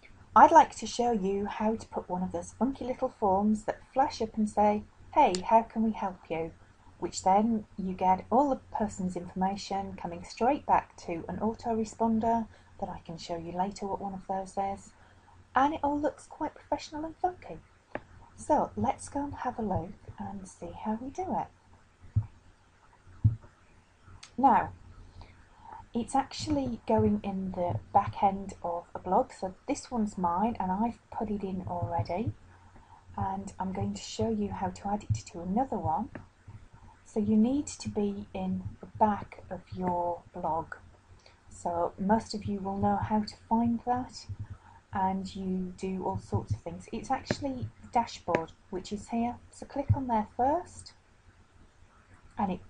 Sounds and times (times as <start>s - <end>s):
Speech: 0.4s - 14.9s, 15.6s - 17.6s, 18.4s - 21.5s, 24.2s - 24.8s, 25.7s - 32.4s, 33.2s - 36.2s, 37.1s - 40.8s, 41.6s - 44.4s, 45.0s - 50.9s, 52.4s - 52.6s.